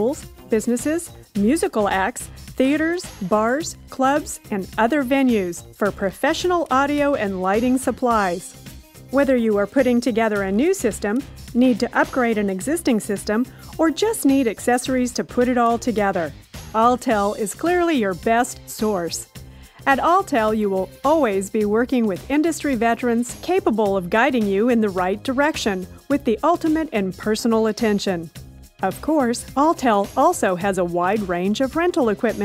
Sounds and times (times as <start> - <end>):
Speech: 0.0 - 8.5, 9.2 - 19.2, 19.9 - 32.4
Music: 0.0 - 32.4.